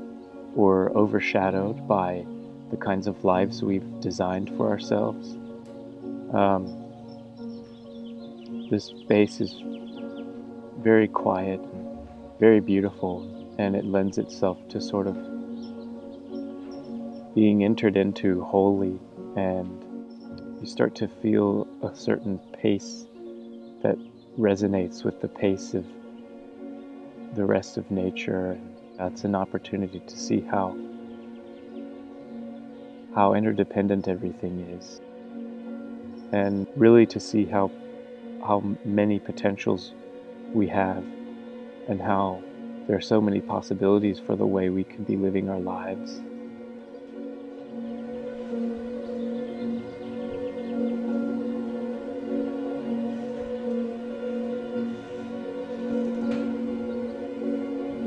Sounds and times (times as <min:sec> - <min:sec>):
Music: 0:00.0 - 0:58.0
Speech: 0:00.6 - 0:05.4, 0:06.3 - 0:06.8, 0:08.7 - 0:09.6, 0:10.8 - 0:11.7, 0:12.4 - 0:15.2, 0:17.4 - 0:19.8, 0:20.6 - 0:23.0, 0:23.8 - 0:25.9, 0:27.4 - 0:30.8, 0:33.2 - 0:35.0, 0:36.4 - 0:37.7, 0:38.4 - 0:39.9, 0:40.6 - 0:41.1, 0:41.9 - 0:46.2.